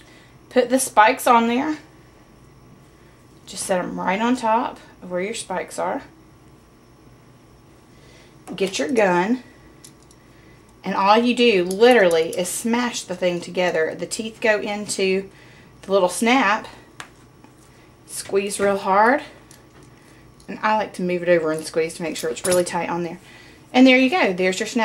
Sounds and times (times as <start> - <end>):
Speech: 3.5 - 6.1, 8.5 - 9.4, 10.9 - 15.3, 18.1 - 19.3, 20.5 - 23.2, 23.8 - 24.8.